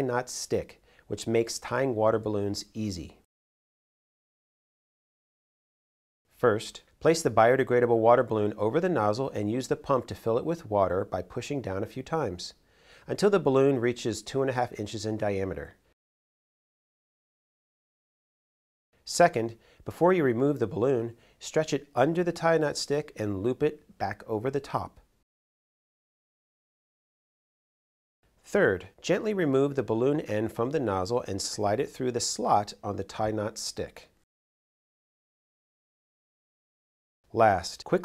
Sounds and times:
Speech: 0.0s - 3.3s, 6.4s - 15.8s, 19.1s - 25.0s, 28.4s - 34.2s, 37.3s - 38.0s.

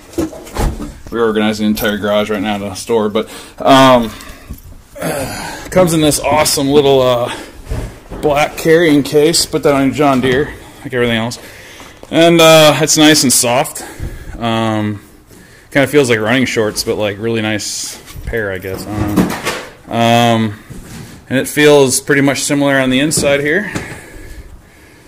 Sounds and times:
Speech: 1.1s - 4.2s, 5.0s - 7.4s, 8.1s - 11.4s, 12.1s - 15.0s, 15.7s - 20.6s, 21.3s - 23.8s.

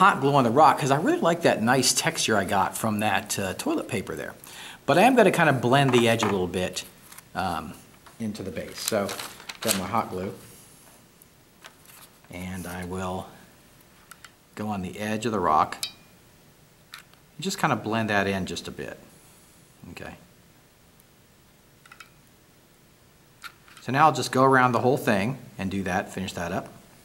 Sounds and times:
Speech: 0.0s - 10.4s, 12.3s - 13.4s, 14.6s - 15.8s, 17.4s - 19.1s, 19.8s - 20.3s, 23.8s - 26.8s.

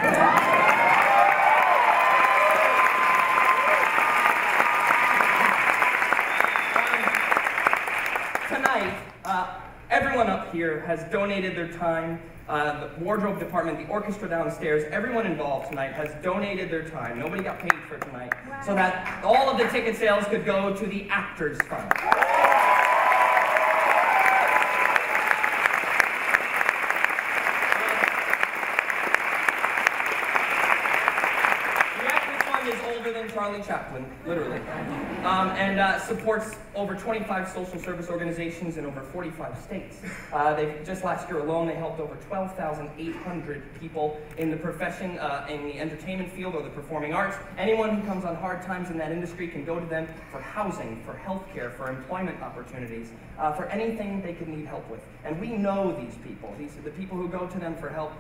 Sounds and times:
Narration, monologue: 8.2s - 22.1s, 31.9s - 58.2s
Male speech, man speaking: 8.5s - 21.9s, 32.0s - 34.6s, 35.2s - 58.2s.

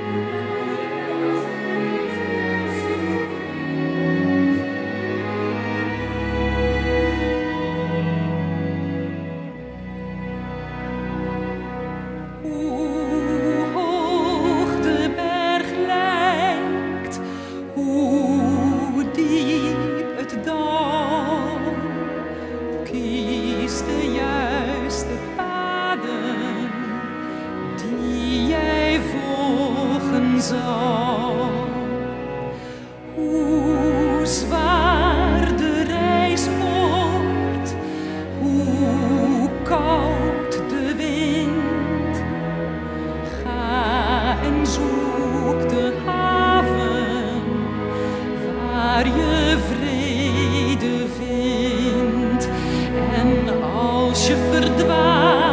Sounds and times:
Music: 0.0s - 55.5s.

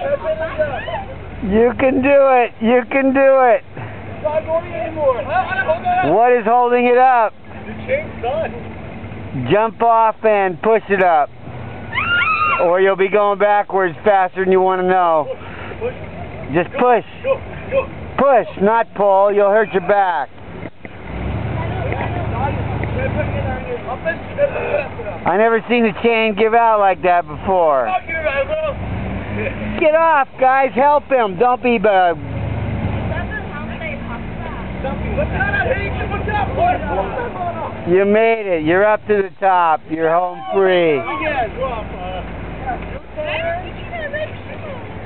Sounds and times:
Vehicle: 0.0s - 45.0s.

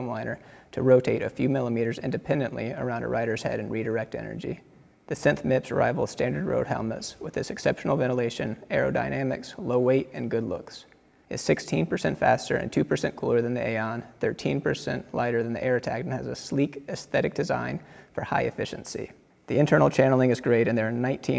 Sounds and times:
Speech: 0.0s - 21.3s.

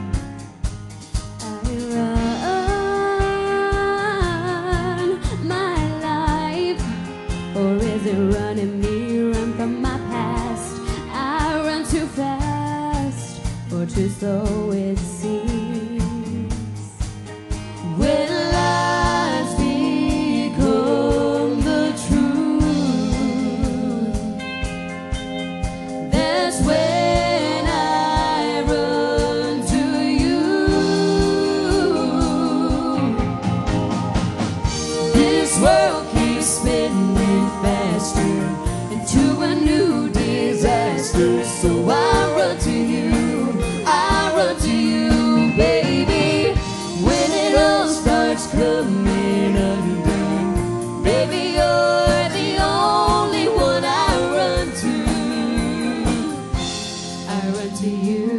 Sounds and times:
Music: 0.0s - 58.3s
Female singing: 1.4s - 16.9s, 17.9s - 24.4s, 26.1s - 33.3s, 35.0s - 56.5s, 57.3s - 58.3s.

